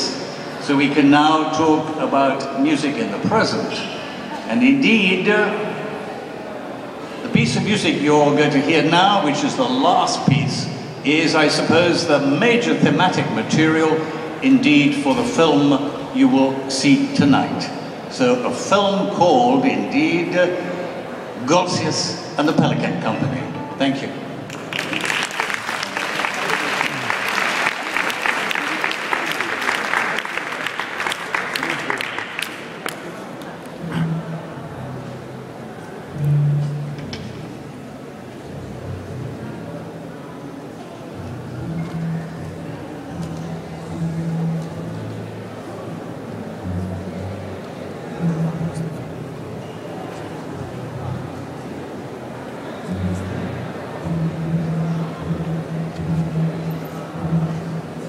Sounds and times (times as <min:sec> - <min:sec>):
Speech: 0:00.0 - 0:05.8, 0:07.2 - 0:20.8, 0:21.4 - 0:24.2, 0:31.4 - 0:32.2.